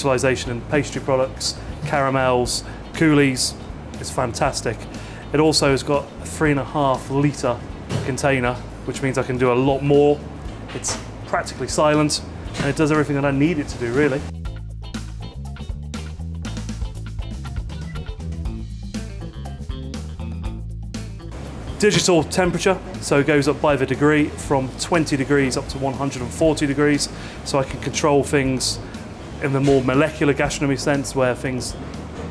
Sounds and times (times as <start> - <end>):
Speech: 0.0 - 10.2, 10.8 - 14.3, 21.8 - 28.8, 29.4 - 31.8
Music: 0.0 - 32.3.